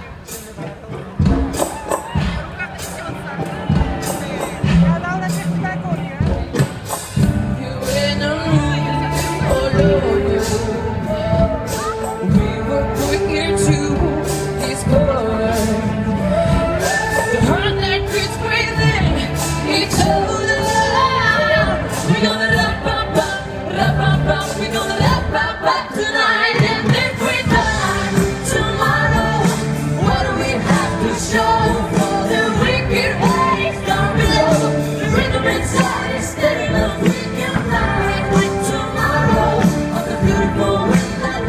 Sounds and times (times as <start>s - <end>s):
Music: 0.0s - 41.4s.